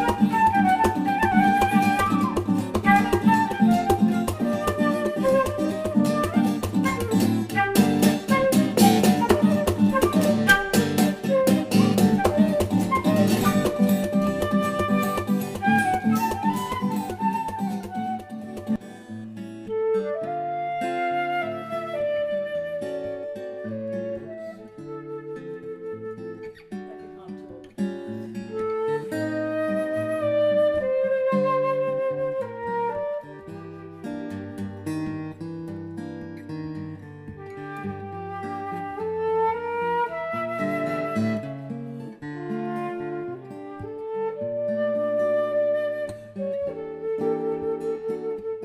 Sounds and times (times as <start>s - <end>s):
Acoustic guitar: 0.0s - 48.6s.